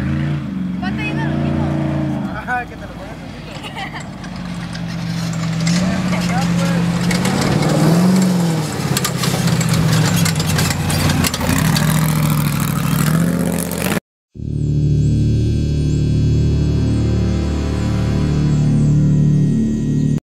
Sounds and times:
Music: 14.4s - 20.2s.

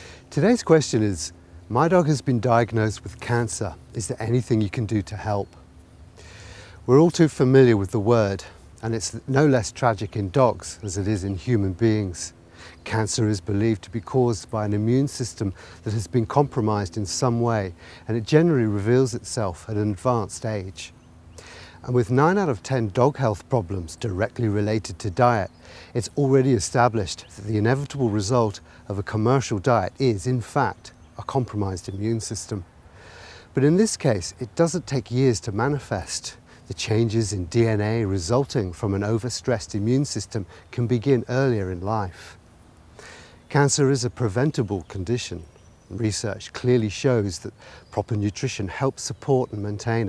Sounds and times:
Speech: 0.3s - 5.6s, 6.9s - 20.9s, 21.8s - 32.7s, 33.6s - 42.4s, 43.5s - 50.0s.

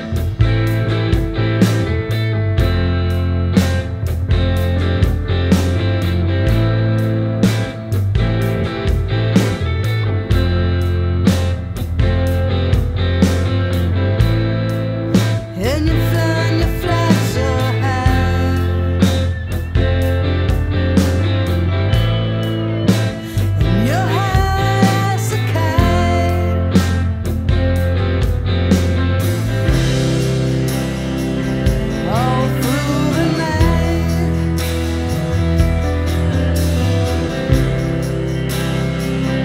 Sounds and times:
Music: 0.0s - 39.4s.

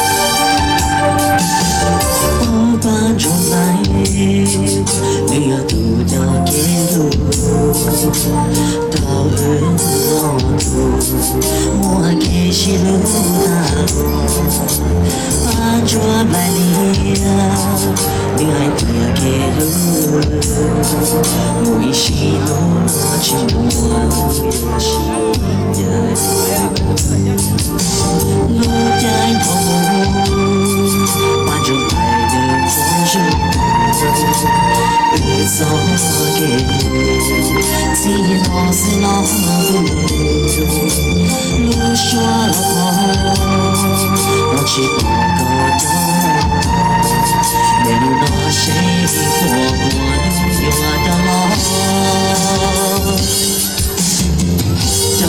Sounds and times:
Male singing: 0.0s - 54.2s, 54.8s - 55.2s
Music: 0.0s - 55.2s.

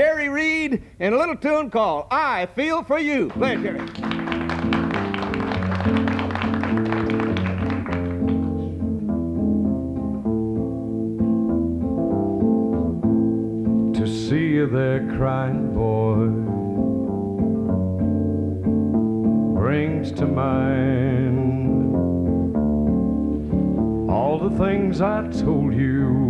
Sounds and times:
Country: 3.0s - 26.2s.

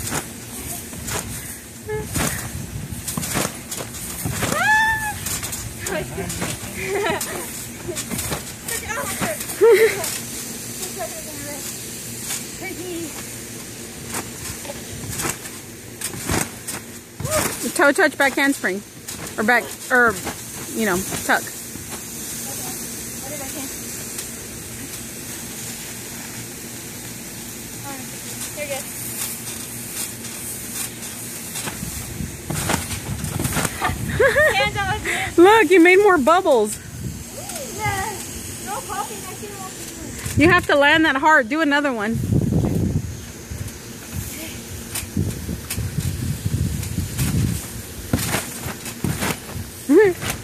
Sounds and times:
Child speech, kid speaking: 8.6s - 9.5s, 10.8s - 11.7s, 12.6s - 13.2s, 22.5s - 23.8s, 27.8s - 28.9s, 37.3s - 40.7s, 44.3s - 44.6s.

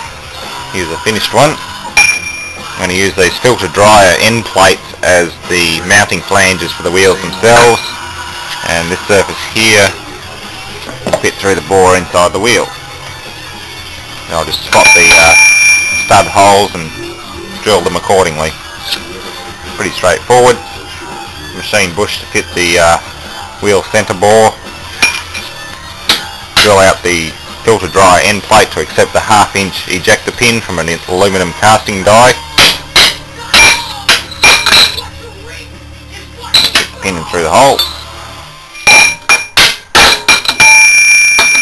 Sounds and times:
Music: 0.0s - 41.6s
Speech: 0.7s - 1.6s, 2.8s - 7.9s, 8.6s - 10.0s, 11.2s - 12.7s, 14.3s - 15.4s, 16.1s - 17.0s, 17.6s - 18.6s, 19.8s - 20.6s, 21.6s - 23.0s, 23.6s - 24.6s, 26.6s - 32.4s, 35.0s - 37.8s.

